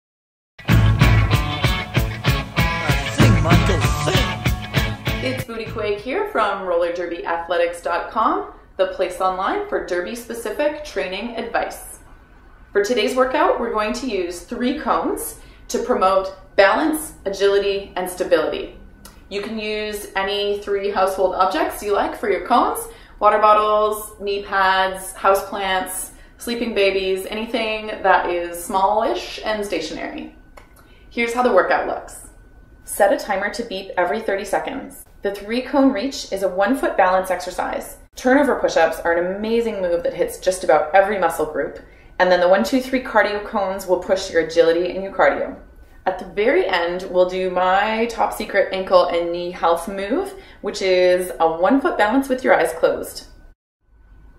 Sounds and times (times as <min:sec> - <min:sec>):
Grunge: 0:00.6 - 0:05.9
Speech: 0:02.9 - 0:04.4, 0:05.2 - 0:12.0, 0:12.8 - 0:30.4, 0:31.2 - 0:32.3, 0:32.9 - 0:53.3.